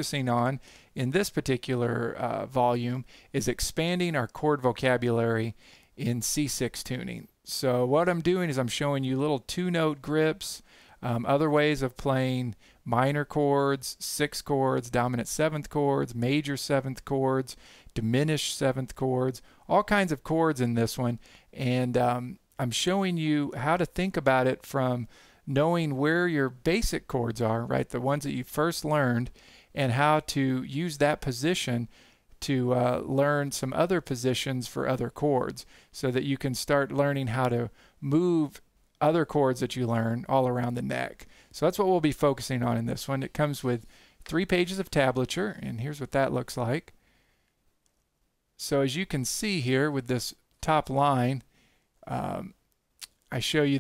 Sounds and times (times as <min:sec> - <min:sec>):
Speech: 0:00.0 - 0:47.0, 0:48.6 - 0:53.8.